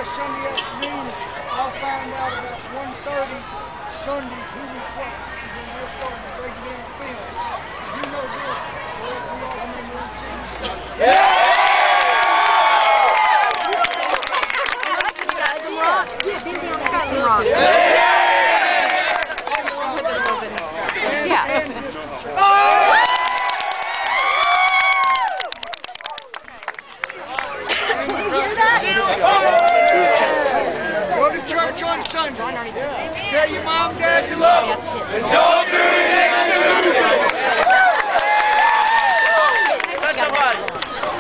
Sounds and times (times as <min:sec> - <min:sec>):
Male speech, man speaking: 0:00.0 - 0:07.3, 0:08.0 - 0:10.7, 0:19.5 - 0:22.6, 0:27.2 - 0:35.4, 0:39.9 - 0:40.7.